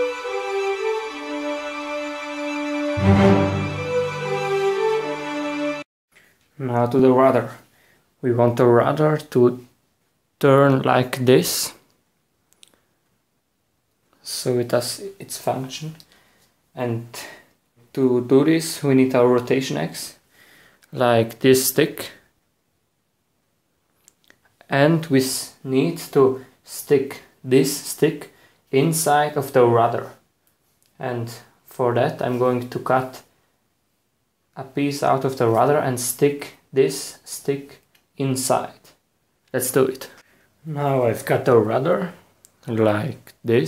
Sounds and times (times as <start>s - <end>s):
Speech: 6.6s - 9.8s, 10.4s - 11.9s, 14.2s - 16.1s, 16.8s - 20.2s, 20.9s - 22.3s, 24.6s - 30.3s, 30.9s - 33.3s, 34.6s - 43.6s.